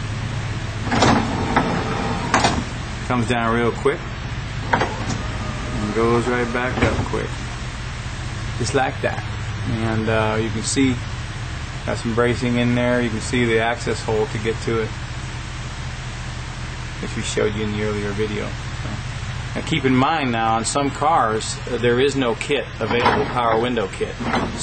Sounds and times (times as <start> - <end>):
Speech: 3.1 - 4.1, 5.8 - 7.4, 8.6 - 11.1, 11.9 - 15.0, 17.0 - 19.0, 19.6 - 24.6.